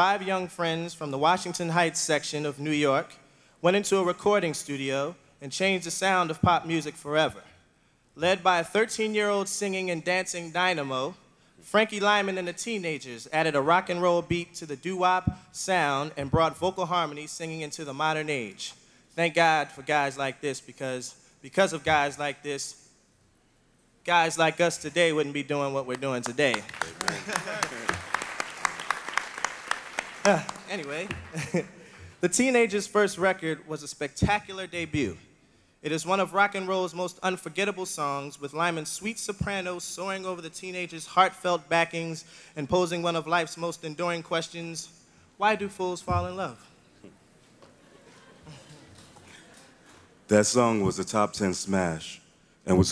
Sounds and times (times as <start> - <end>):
Speech: 0.0 - 7.5, 8.2 - 22.8, 24.1 - 27.9, 30.2 - 31.2, 32.2 - 35.2, 35.8 - 46.7, 50.3 - 52.9.